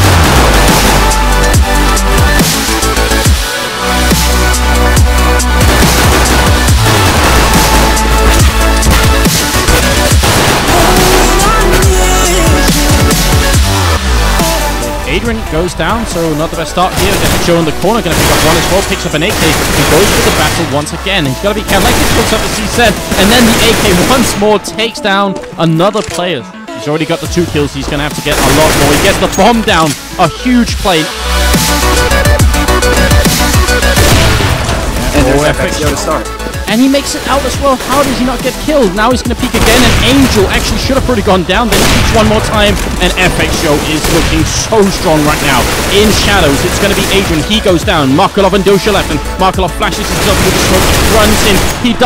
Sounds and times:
Music: 0:00.0 - 0:52.0
Speech: 0:15.1 - 0:31.1, 0:35.1 - 0:52.0.

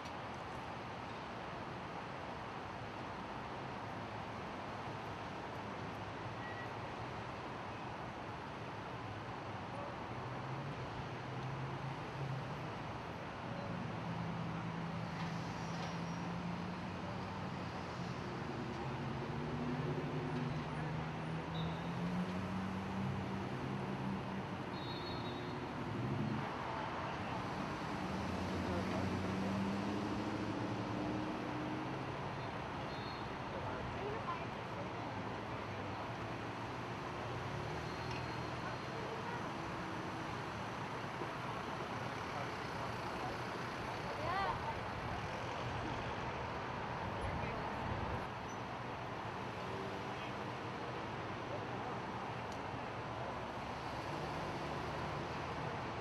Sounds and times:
Vehicle: 0:00.0 - 0:56.0.

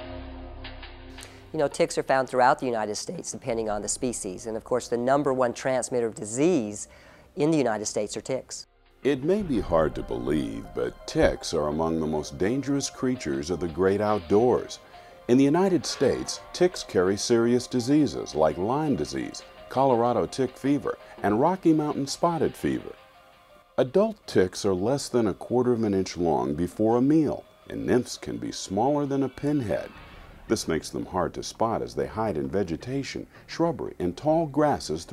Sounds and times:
Music: 0:00.0 - 0:04.9, 0:08.6 - 0:35.1
Speech: 0:01.6 - 0:23.0, 0:23.8 - 0:35.1.

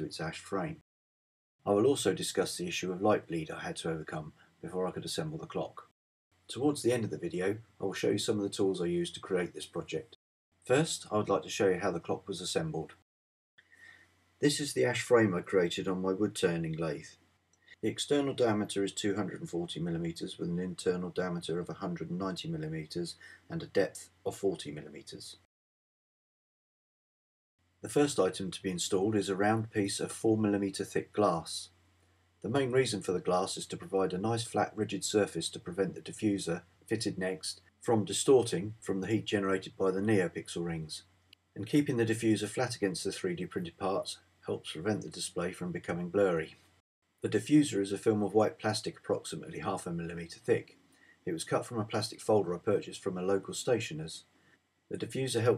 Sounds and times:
Speech: 0:00.0 - 0:00.8, 0:01.7 - 0:05.9, 0:06.5 - 0:13.0, 0:14.4 - 0:17.1, 0:17.8 - 0:25.5, 0:27.9 - 0:31.7, 0:32.4 - 0:46.6, 0:47.2 - 0:54.3, 0:54.9 - 0:55.5.

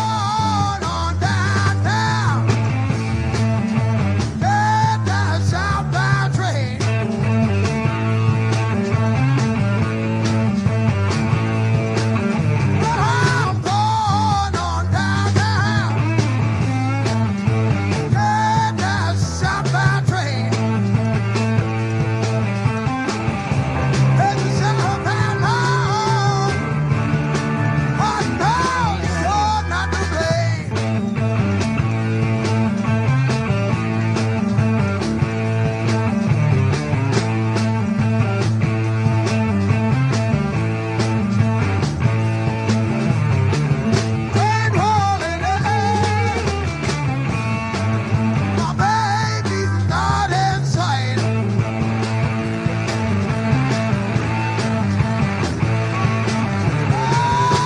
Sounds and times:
Singing: 0:00.0 - 0:02.5, 0:04.4 - 0:06.9, 0:12.8 - 0:16.1, 0:18.1 - 0:20.7, 0:24.2 - 0:26.7, 0:28.0 - 0:30.7, 0:44.3 - 0:46.5, 0:48.6 - 0:51.4, 0:56.8 - 0:57.6
Psychedelic rock: 0:00.0 - 0:57.6.

